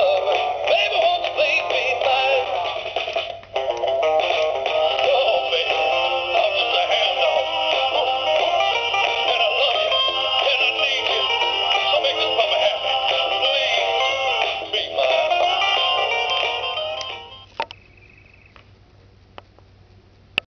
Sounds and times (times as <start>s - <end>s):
Music: 0.0s - 17.6s.